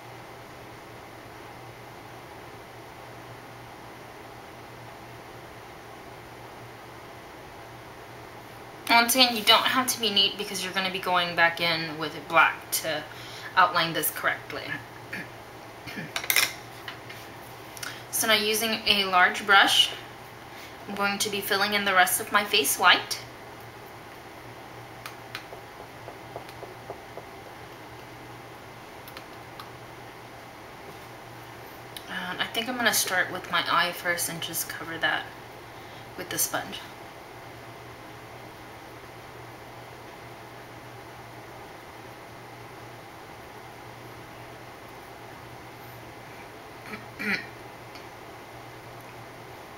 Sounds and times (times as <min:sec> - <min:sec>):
Inside, small room: 0:00.0 - 0:49.7
Speech: 0:08.9 - 0:14.8, 0:18.2 - 0:20.0, 0:20.9 - 0:23.3, 0:32.0 - 0:35.3, 0:36.2 - 0:36.9.